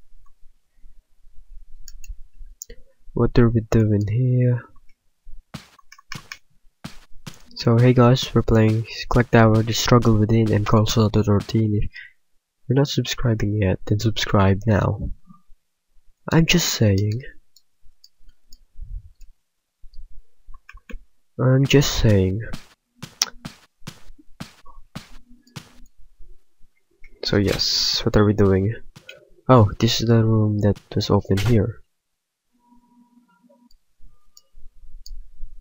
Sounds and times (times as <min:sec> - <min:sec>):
Speech: 0:03.2 - 0:04.7, 0:07.5 - 0:12.1, 0:12.7 - 0:15.2, 0:16.3 - 0:17.4, 0:21.4 - 0:22.6, 0:27.2 - 0:28.9, 0:29.5 - 0:31.8.